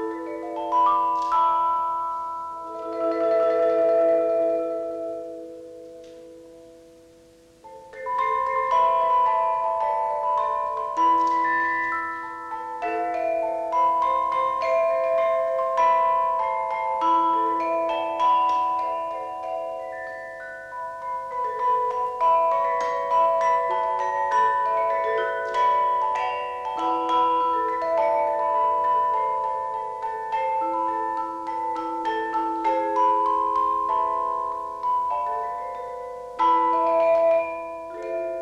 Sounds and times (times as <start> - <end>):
Music: 0.0 - 38.4.